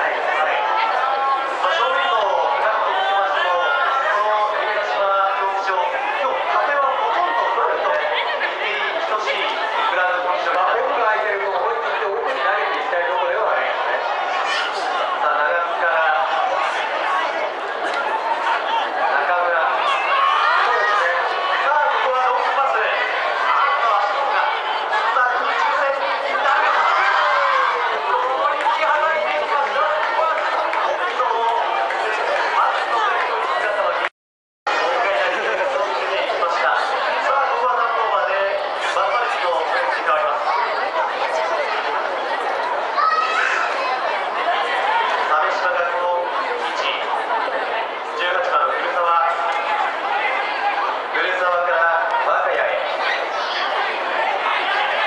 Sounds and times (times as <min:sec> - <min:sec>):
Chatter: 0:00.0 - 0:34.1, 0:34.7 - 0:55.0
Speech: 0:00.0 - 0:34.1, 0:34.7 - 0:55.0.